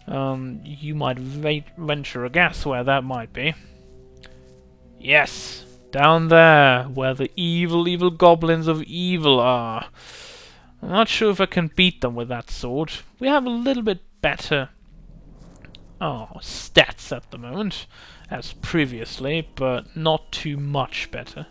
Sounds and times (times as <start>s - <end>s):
Speech: 0.1s - 3.6s, 5.0s - 9.9s, 10.8s - 14.8s, 16.0s - 21.5s.